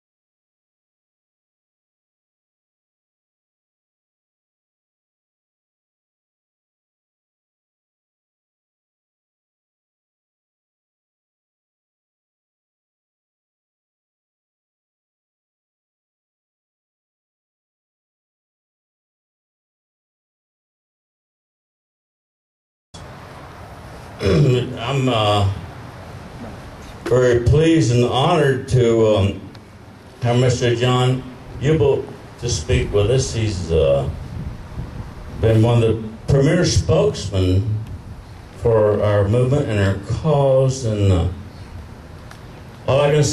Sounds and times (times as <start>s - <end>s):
Male speech, man speaking: 24.2s - 25.6s, 27.1s - 29.5s, 30.2s - 34.2s, 35.4s - 37.8s, 38.6s - 41.4s, 42.9s - 43.3s.